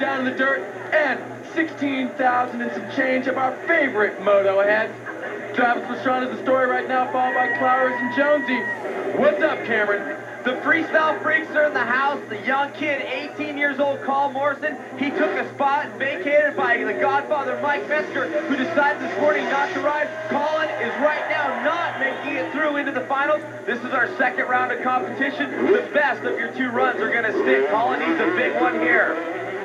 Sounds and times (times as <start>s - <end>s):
Speech: 0.0s - 29.3s.